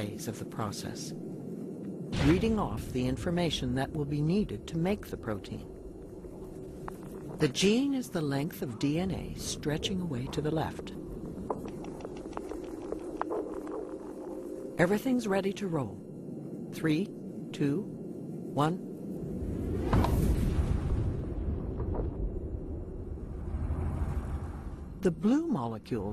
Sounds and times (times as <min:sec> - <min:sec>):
Speech: 0:00.0 - 0:01.2, 0:02.2 - 0:05.7, 0:07.4 - 0:11.0, 0:14.8 - 0:16.0, 0:16.8 - 0:17.9, 0:18.5 - 0:18.9, 0:25.0 - 0:26.1.